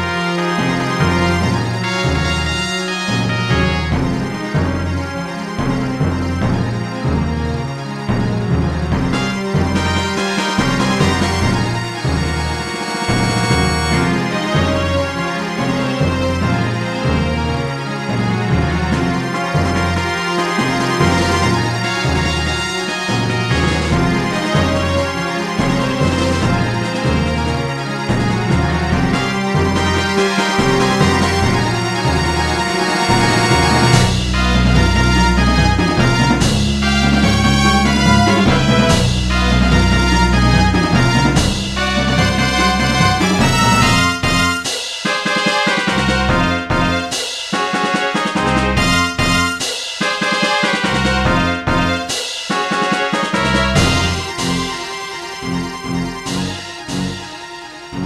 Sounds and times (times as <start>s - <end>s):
Music: 0.0s - 58.0s.